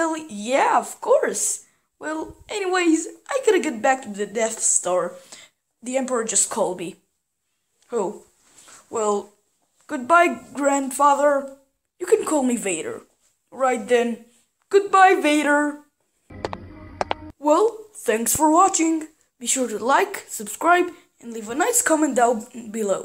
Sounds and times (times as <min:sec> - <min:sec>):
Speech: 0:00.0 - 0:05.2, 0:05.8 - 0:07.0, 0:07.9 - 0:08.3, 0:08.9 - 0:15.9, 0:17.4 - 0:23.0.